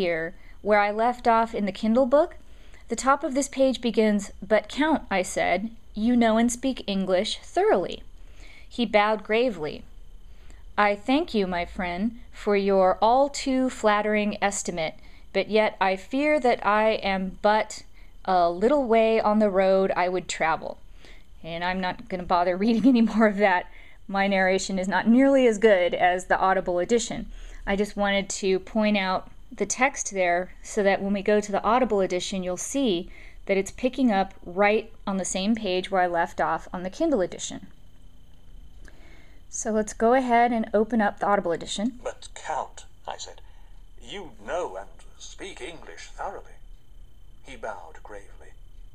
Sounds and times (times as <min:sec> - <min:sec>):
Speech synthesizer: 0:42.1 - 0:43.4, 0:44.0 - 0:46.6.